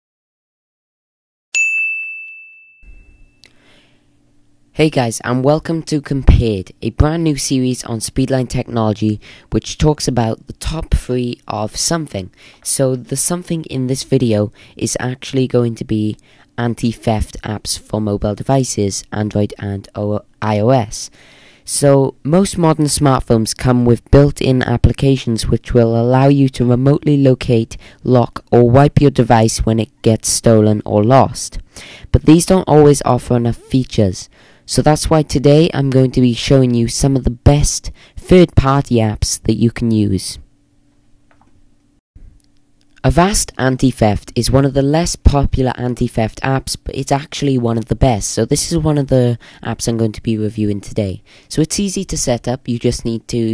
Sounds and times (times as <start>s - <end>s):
Ding: 1.6s - 3.5s.